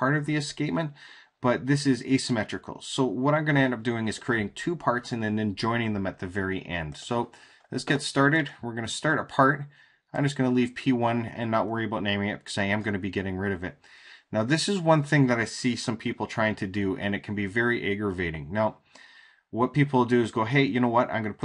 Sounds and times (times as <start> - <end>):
Speech: 0.0 - 18.8, 19.5 - 21.4.